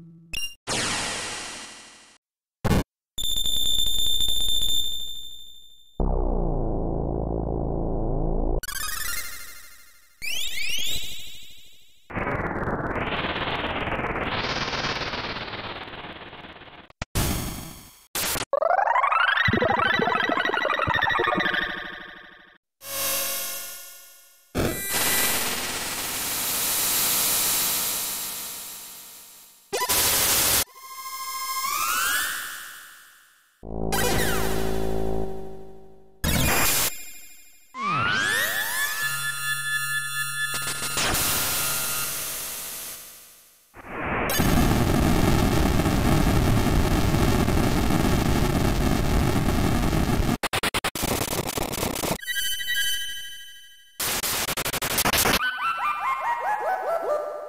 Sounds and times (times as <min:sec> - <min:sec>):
Sound effect: 0:00.0 - 0:57.2.